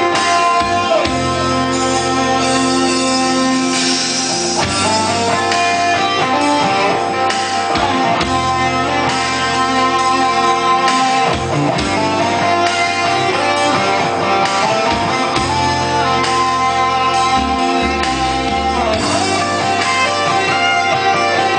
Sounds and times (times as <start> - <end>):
Music: 0.0 - 21.5.